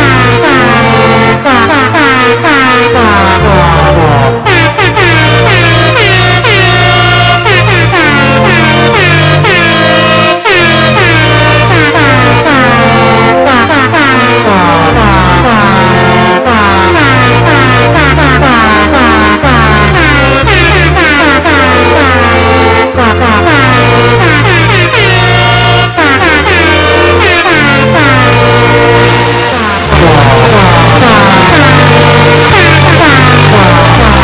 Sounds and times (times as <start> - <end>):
Air horn, truck horn: 0.0 - 34.2
Music: 0.0 - 34.2.